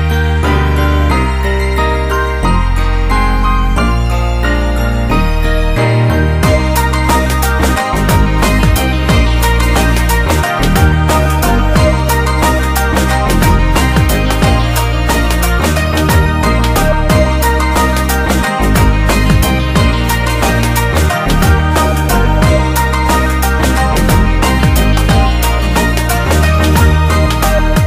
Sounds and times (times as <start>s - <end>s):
Music: 0.0s - 27.8s.